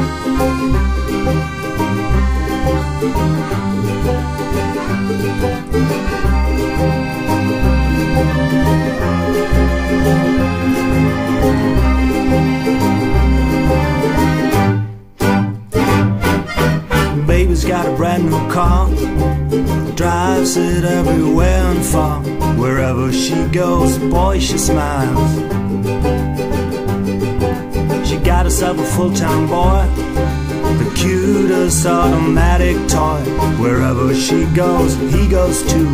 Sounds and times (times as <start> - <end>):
Music: 0.0 - 35.9.